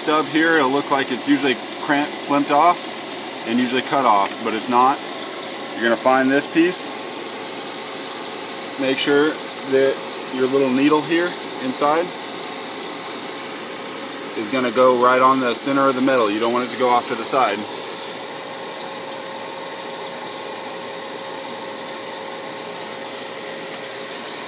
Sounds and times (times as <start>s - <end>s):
Speech: 0.0s - 5.0s, 5.8s - 7.0s, 8.8s - 12.2s, 14.4s - 17.7s.